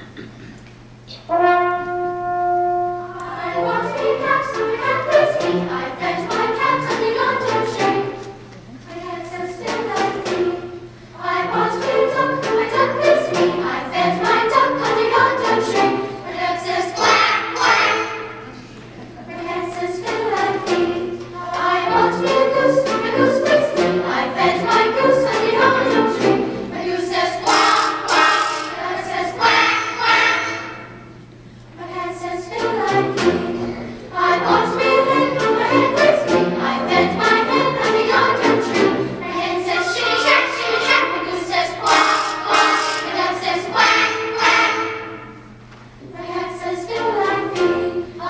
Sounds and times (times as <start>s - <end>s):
Music: 1.0s - 48.2s.